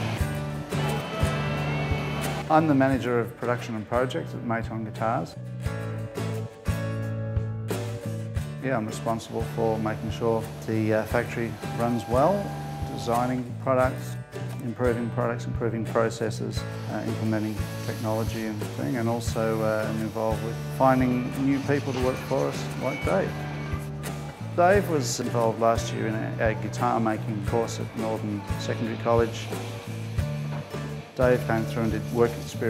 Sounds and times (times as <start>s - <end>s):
Acoustic guitar: 0.0s - 4.0s, 5.1s - 32.7s
Speech: 2.5s - 5.4s, 8.6s - 23.3s, 24.6s - 29.5s, 31.2s - 32.7s.